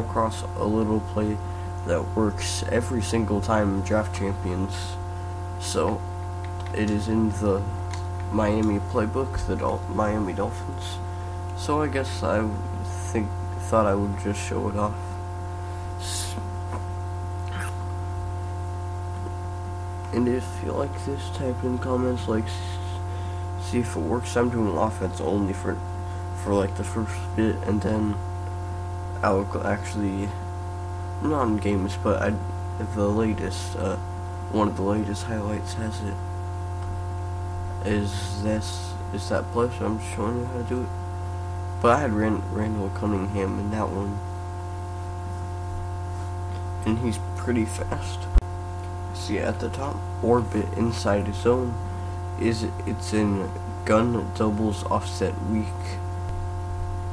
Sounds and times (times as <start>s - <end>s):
Speech: 0.0s - 5.0s, 5.6s - 6.0s, 6.7s - 11.0s, 11.6s - 15.1s, 16.0s - 16.5s, 20.1s - 23.0s, 23.6s - 25.8s, 26.4s - 28.2s, 29.2s - 30.4s, 31.2s - 36.2s, 37.8s - 40.9s, 41.8s - 44.2s, 46.8s - 48.4s, 49.1s - 51.8s, 52.4s - 56.0s.